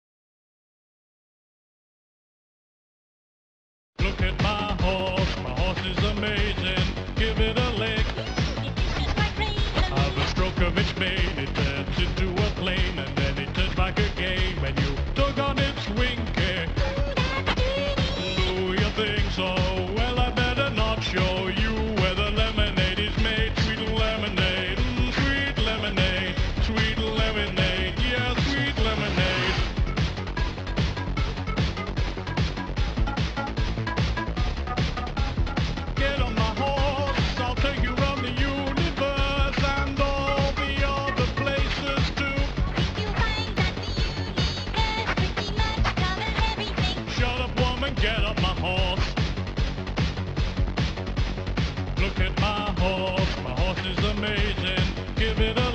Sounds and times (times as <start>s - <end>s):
Music: 4.0s - 55.7s.